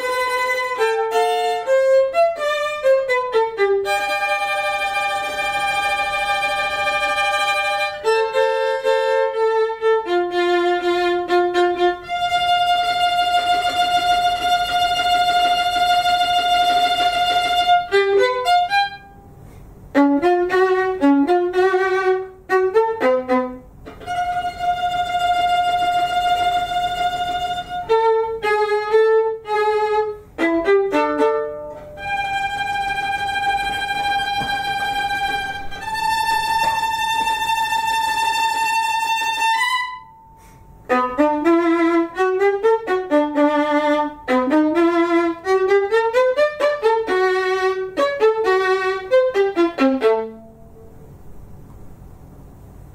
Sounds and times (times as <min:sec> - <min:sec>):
Violin, fiddle: 0:00.0 - 0:19.2, 0:19.9 - 0:40.1, 0:40.9 - 0:50.5.